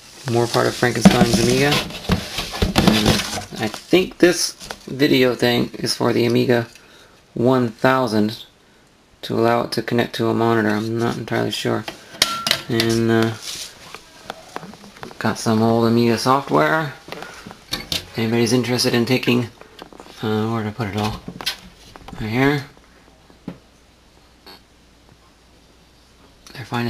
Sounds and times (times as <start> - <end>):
Inside, small room: 0.0 - 26.8
Speech: 0.2 - 1.9, 2.8 - 6.7, 7.4 - 8.5, 9.2 - 11.9, 12.6 - 13.4, 14.2 - 17.0, 18.1 - 19.6, 20.2 - 21.2, 22.2 - 22.8, 26.5 - 26.8.